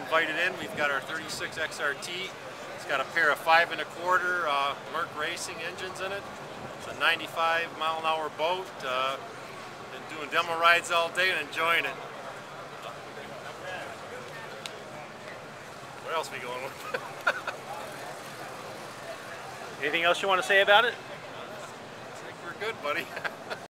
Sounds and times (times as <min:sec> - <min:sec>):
Speech: 0:00.0 - 0:06.2, 0:06.8 - 0:09.2, 0:09.9 - 0:12.0, 0:16.0 - 0:17.0.